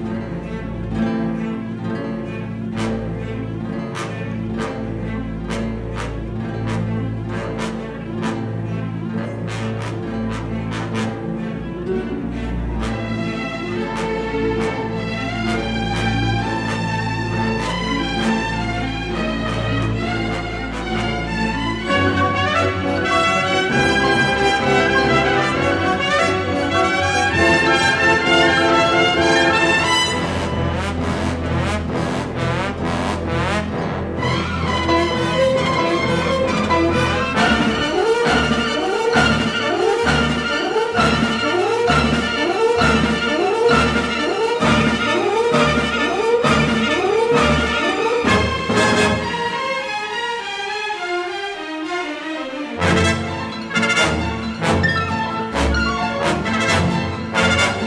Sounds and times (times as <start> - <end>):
Music: 0.0 - 57.8.